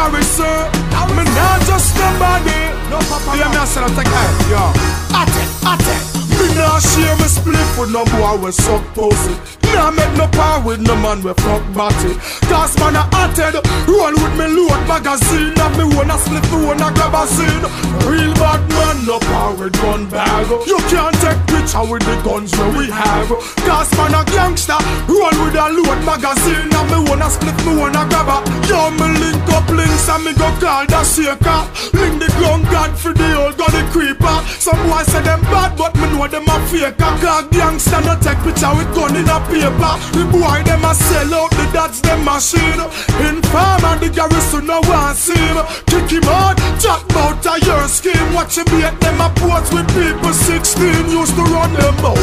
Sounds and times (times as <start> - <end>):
Music: 0.0 - 52.2.